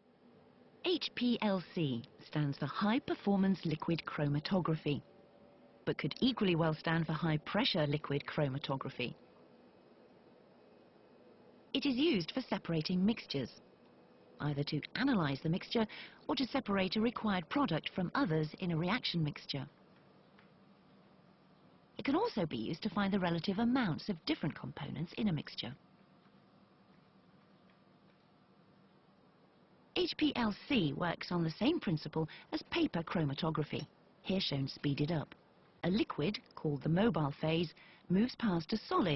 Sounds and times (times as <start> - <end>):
Speech: 0.9 - 5.1, 5.9 - 9.2, 11.8 - 13.6, 14.4 - 19.8, 22.0 - 25.8, 30.0 - 39.1.